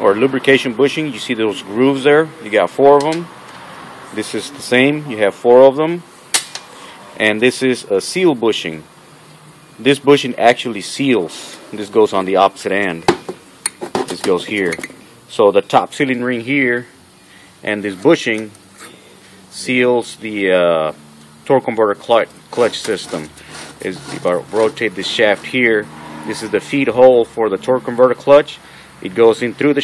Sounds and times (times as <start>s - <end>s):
Speech: 0.0s - 3.3s, 4.1s - 6.1s, 7.2s - 8.9s, 9.8s - 13.1s, 14.0s - 16.9s, 17.6s - 18.6s, 19.5s - 29.8s.